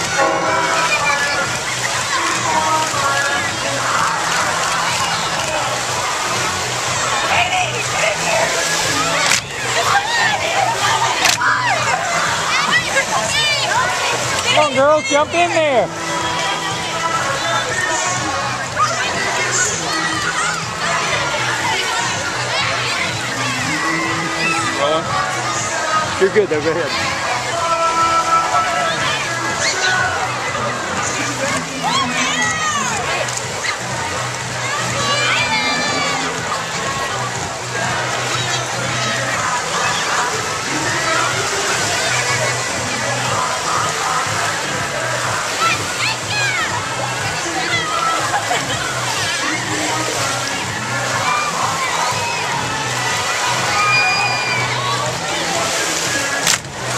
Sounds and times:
Music: 0.0s - 56.9s
Speech: 0.1s - 56.9s.

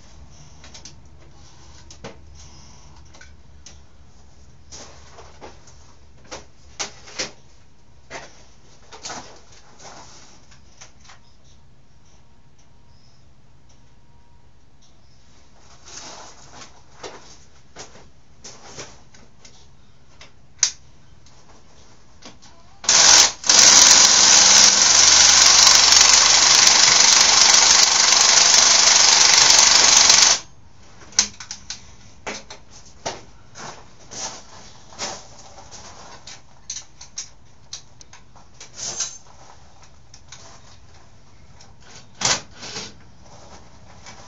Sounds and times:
Inside, small room: 0.0s - 44.2s
Engine: 22.9s - 30.5s.

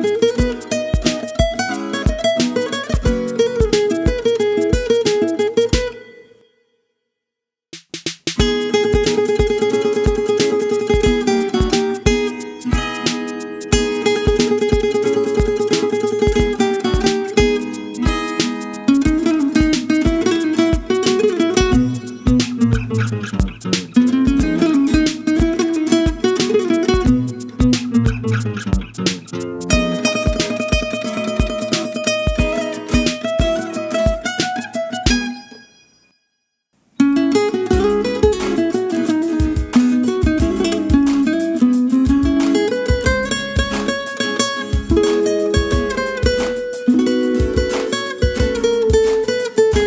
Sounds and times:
Strum: 0.0s - 6.2s, 7.8s - 36.0s, 37.0s - 49.8s
Acoustic guitar: 0.0s - 6.4s, 8.4s - 36.0s, 36.9s - 49.8s.

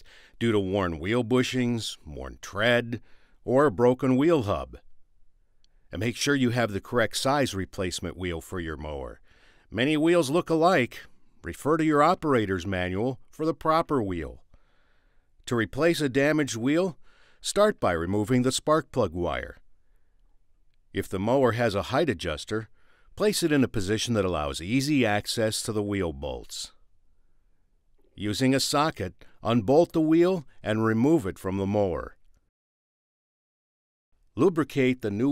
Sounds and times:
Speech: 0.0s - 4.8s, 6.0s - 14.4s, 15.5s - 19.6s, 21.0s - 26.8s, 28.2s - 32.2s, 34.4s - 35.3s.

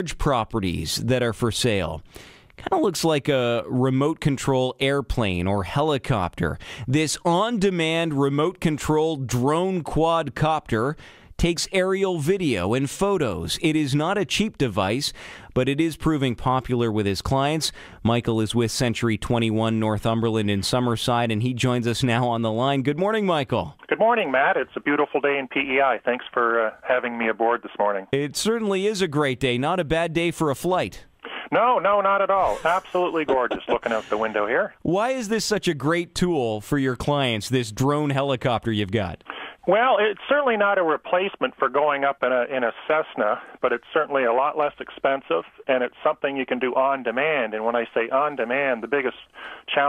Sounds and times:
Speech: 0.0s - 2.0s, 2.6s - 49.8s.

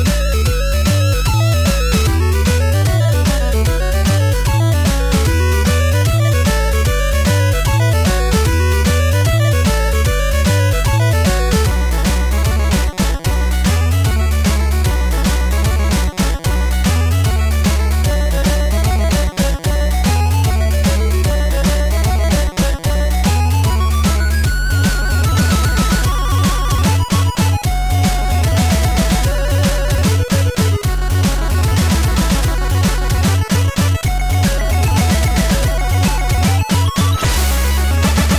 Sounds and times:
Theme music: 0.0s - 38.3s.

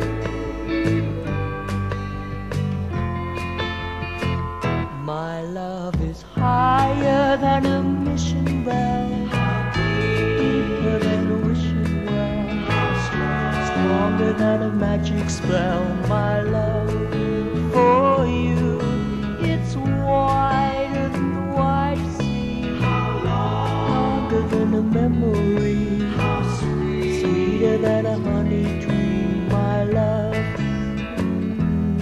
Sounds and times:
Music: 0.0s - 32.0s.

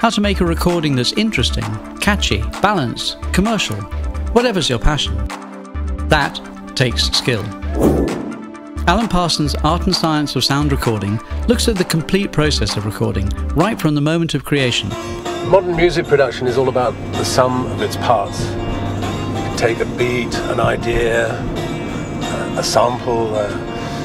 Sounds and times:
Speech: 0.0s - 5.3s, 6.1s - 7.6s, 8.8s - 14.9s, 15.5s - 18.5s, 22.4s - 23.6s
Music: 0.0s - 24.0s.

